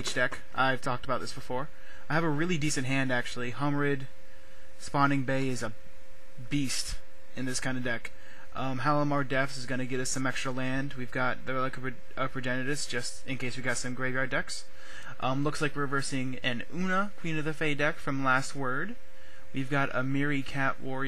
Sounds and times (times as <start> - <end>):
Speech: 0.0 - 4.1, 4.8 - 5.8, 6.4 - 21.0.